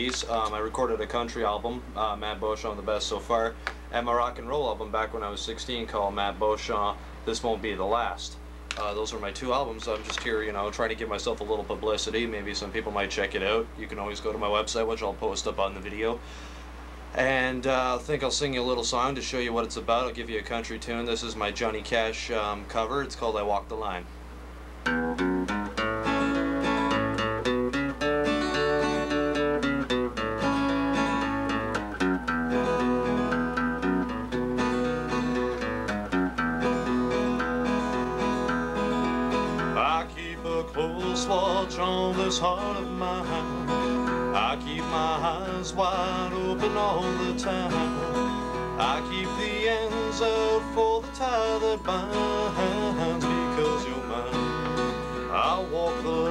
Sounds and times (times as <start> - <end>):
Speech: 0.0 - 16.2, 17.2 - 24.1, 39.8 - 43.5, 44.4 - 48.0, 48.8 - 54.4, 55.3 - 56.3
Music: 24.8 - 56.3.